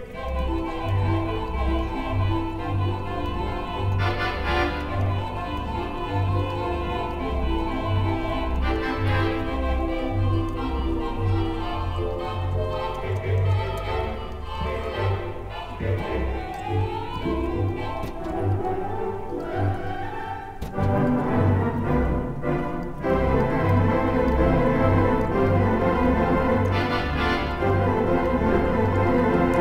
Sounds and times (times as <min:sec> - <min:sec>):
Musical instrument: 0:00.0 - 0:29.6.